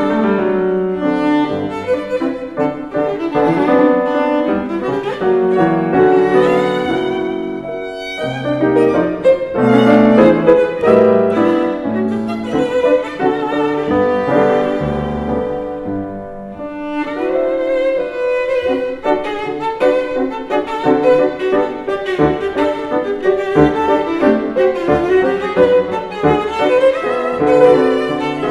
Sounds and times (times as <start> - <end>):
Violin, fiddle: 0.0 - 28.5.